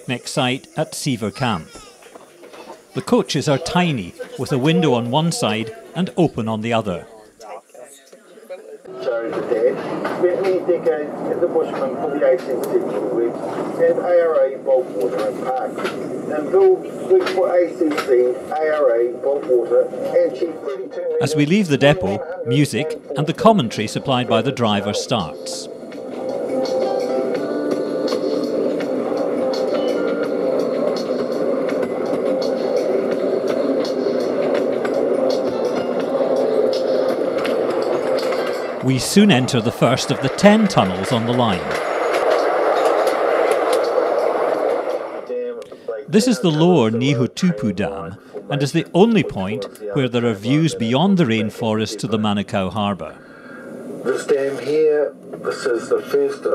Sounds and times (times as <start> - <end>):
Speech: 0.0 - 1.9, 3.0 - 8.0, 8.9 - 25.7, 38.8 - 41.8, 46.1 - 53.2, 54.1 - 56.5.